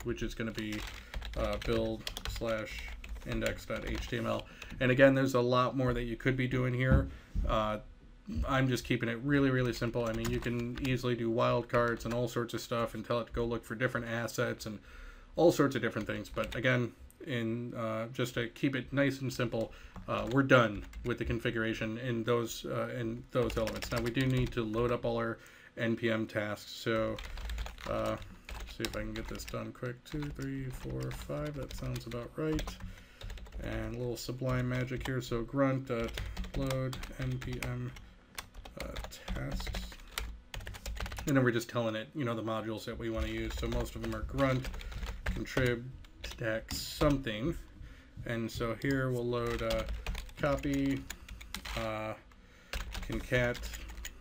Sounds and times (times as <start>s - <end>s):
Computer keyboard: 0.0s - 4.8s, 9.6s - 11.1s, 11.7s - 12.2s, 16.0s - 16.6s, 19.6s - 21.2s, 23.4s - 24.9s, 27.0s - 35.2s, 36.0s - 41.3s, 43.2s - 47.2s, 48.7s - 51.9s, 52.7s - 54.2s
Speech: 0.0s - 14.8s, 15.4s - 32.8s, 33.6s - 38.0s, 38.7s - 40.0s, 41.2s - 51.1s, 51.7s - 52.3s, 53.0s - 53.9s.